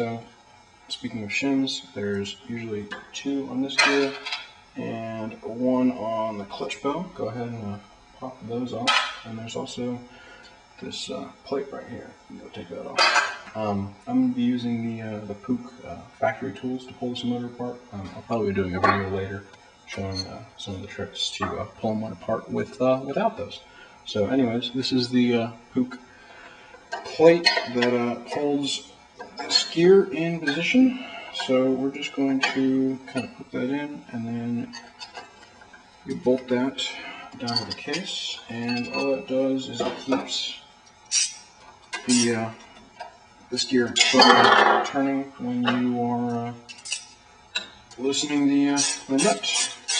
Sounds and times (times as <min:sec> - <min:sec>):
Speech: 0:00.0 - 0:00.3, 0:00.9 - 0:04.2, 0:04.8 - 0:10.1, 0:10.8 - 0:26.0, 0:27.0 - 0:28.9, 0:29.5 - 0:34.8, 0:36.1 - 0:40.7, 0:42.0 - 0:42.7, 0:43.5 - 0:46.7, 0:48.0 - 0:49.8.